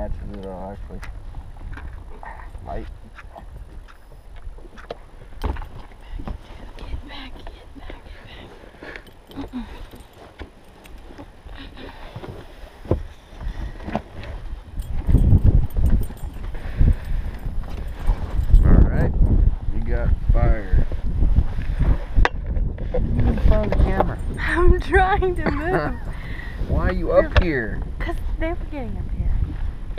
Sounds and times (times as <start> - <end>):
Sailboat, sailing ship: 0.0 - 29.9.